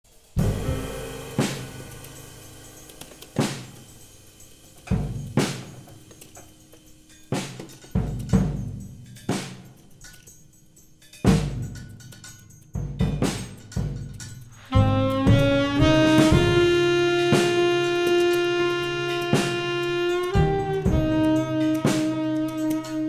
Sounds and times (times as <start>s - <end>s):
Drum kit: 0.0s - 23.0s
Bass drum: 0.4s - 3.8s, 14.7s - 22.6s
Rimshot: 0.4s - 3.9s.